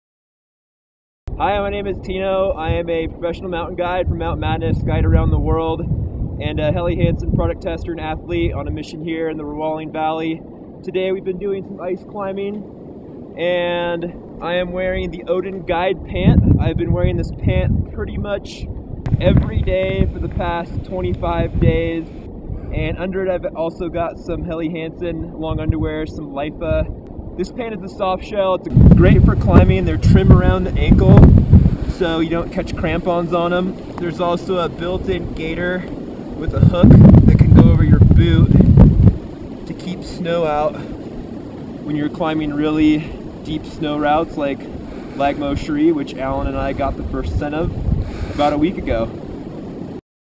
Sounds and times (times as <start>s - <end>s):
Speech: 1.4s - 5.8s, 6.4s - 12.7s, 13.4s - 22.1s, 22.7s - 31.2s, 31.9s - 38.6s, 39.7s - 40.9s, 41.8s - 47.8s, 48.4s - 49.2s.